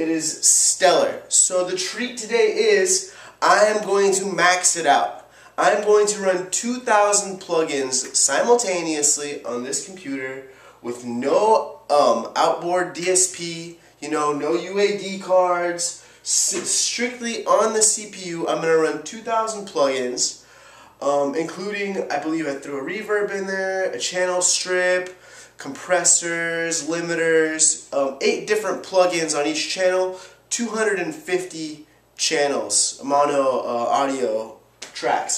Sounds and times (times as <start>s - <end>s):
Speech: 0.0s - 20.4s, 21.0s - 35.3s.